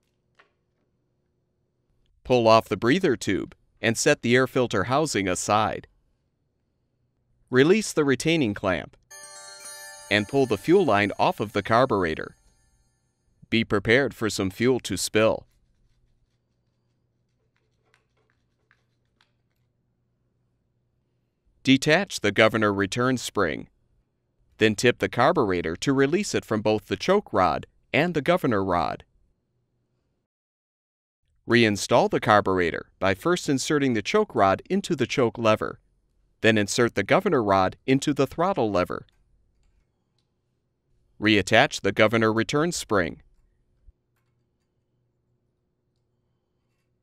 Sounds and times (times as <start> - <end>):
Speech: 2.2 - 5.9, 7.5 - 9.0, 10.1 - 12.3, 13.5 - 15.5, 21.7 - 23.7, 24.6 - 29.0, 31.5 - 35.8, 36.4 - 39.1, 41.2 - 43.2
Music: 9.1 - 13.3.